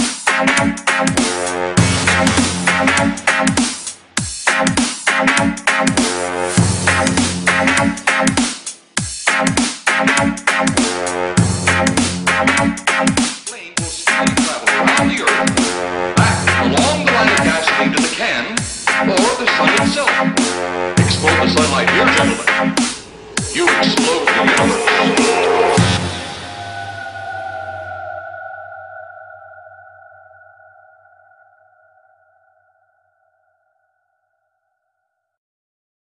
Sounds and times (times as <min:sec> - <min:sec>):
Music: 0:00.0 - 0:29.6
Silence: 0:22.4 - 0:33.8.